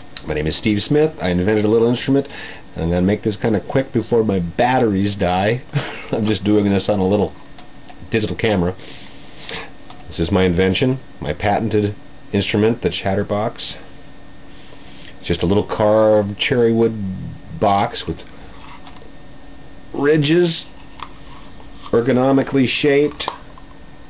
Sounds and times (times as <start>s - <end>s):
Speech: 0.2s - 7.4s, 8.0s - 8.8s, 10.1s - 13.9s, 15.2s - 18.3s, 19.9s - 20.7s, 21.9s - 23.3s.